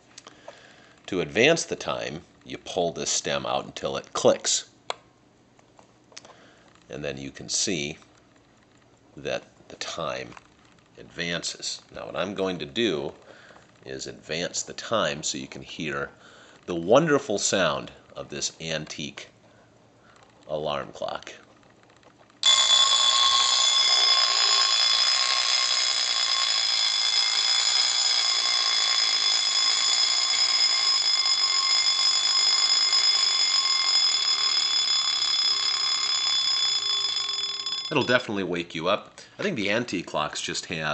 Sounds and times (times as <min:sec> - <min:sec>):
Speech: 0:01.1 - 0:04.7, 0:06.9 - 0:08.1, 0:09.2 - 0:10.4, 0:11.0 - 0:13.2, 0:13.9 - 0:19.4, 0:20.5 - 0:21.4, 0:37.9 - 0:40.9
Clock: 0:22.4 - 0:38.2
Alarm clock: 0:22.4 - 0:38.4.